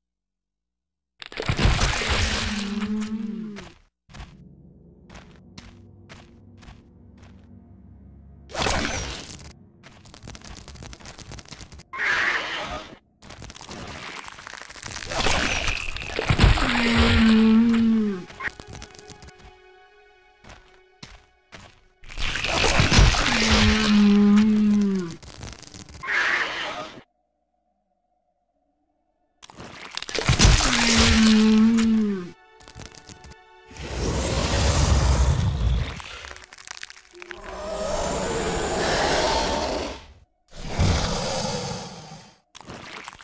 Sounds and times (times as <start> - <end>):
Music: 4.2 - 11.2, 16.0 - 24.4, 30.1 - 39.6.